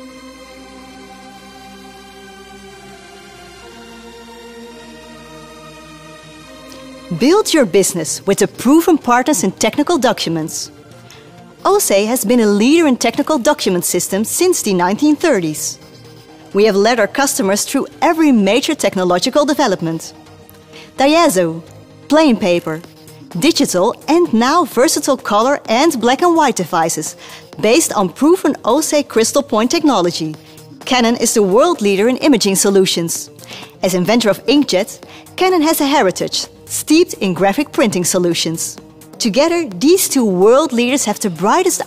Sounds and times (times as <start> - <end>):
Music: 0.0 - 41.8
Speech: 7.1 - 10.7, 11.7 - 15.8, 16.6 - 20.1, 21.0 - 22.8, 23.4 - 41.8.